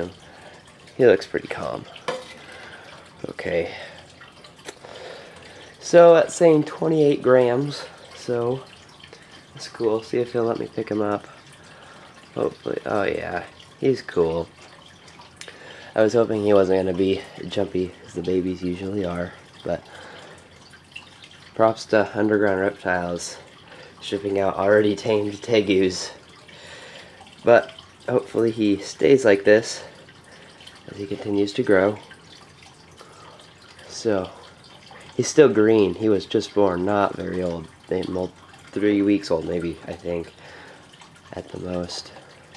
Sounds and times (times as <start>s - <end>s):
Water: 0.0s - 42.5s.